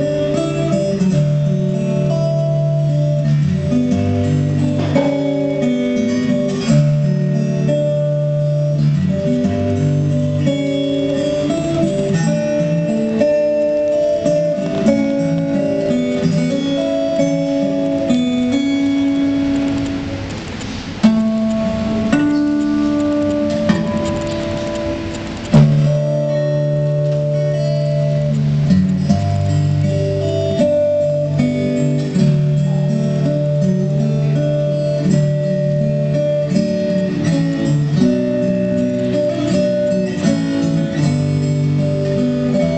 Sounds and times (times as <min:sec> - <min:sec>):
Music: 0:00.0 - 0:42.7.